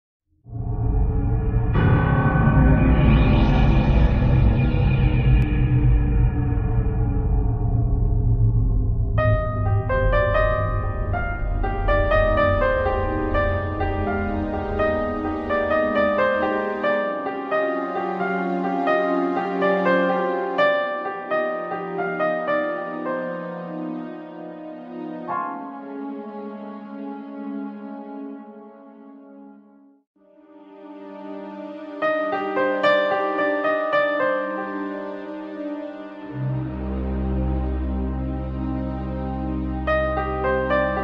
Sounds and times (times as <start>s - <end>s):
Soundtrack music: 0.5s - 29.7s, 30.6s - 41.0s.